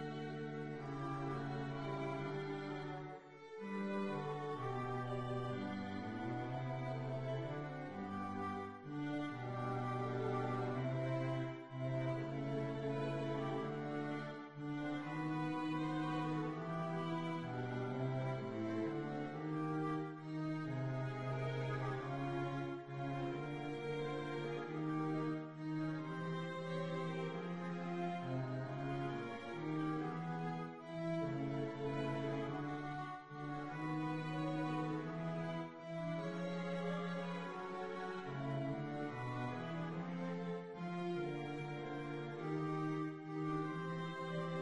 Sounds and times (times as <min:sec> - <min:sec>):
Violin, fiddle: 0:00.0 - 0:44.6.